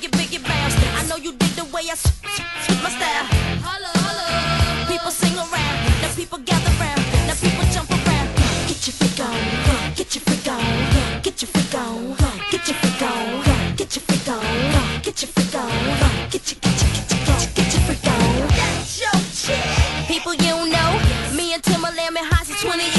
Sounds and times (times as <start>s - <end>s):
Music: 0.0s - 22.9s.